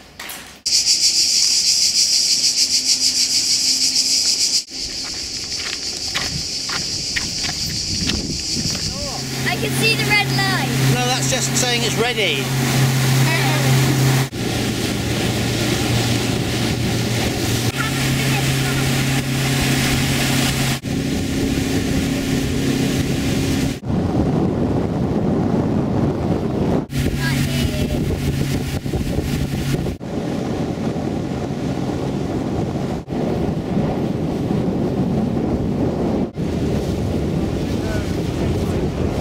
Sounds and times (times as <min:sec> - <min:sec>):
Outside, rural or natural: 0:00.0 - 0:39.2
Motorboat, speedboat: 0:06.6 - 0:39.2
Speech: 0:08.9 - 0:12.5, 0:13.2 - 0:13.8, 0:27.2 - 0:28.1, 0:37.7 - 0:38.8.